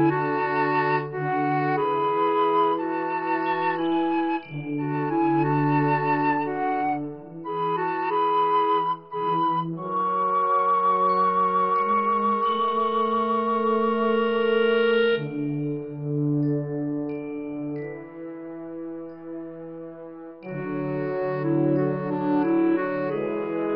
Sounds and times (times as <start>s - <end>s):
Music: 0.0s - 23.7s.